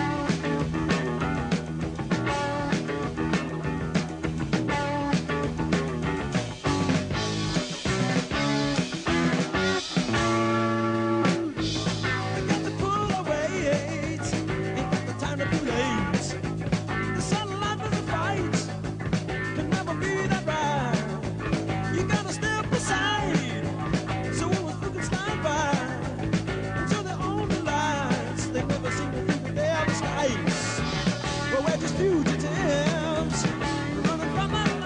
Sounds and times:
Music: 0:00.0 - 0:34.8.

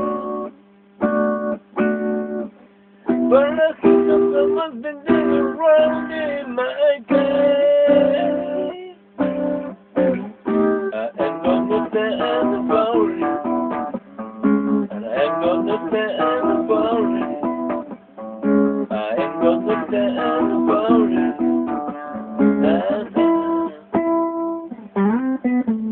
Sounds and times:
Guitar: 0:00.0 - 0:25.9.

